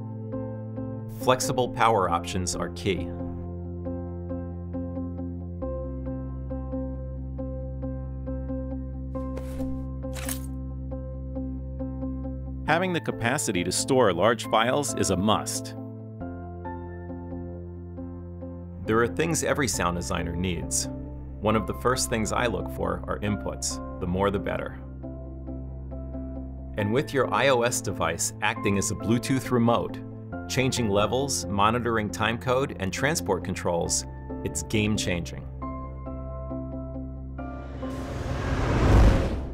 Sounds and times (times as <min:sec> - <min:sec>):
Music: 0:00.0 - 0:39.5
Speech: 0:01.2 - 0:03.3, 0:12.7 - 0:15.8, 0:18.8 - 0:24.8, 0:26.8 - 0:35.5.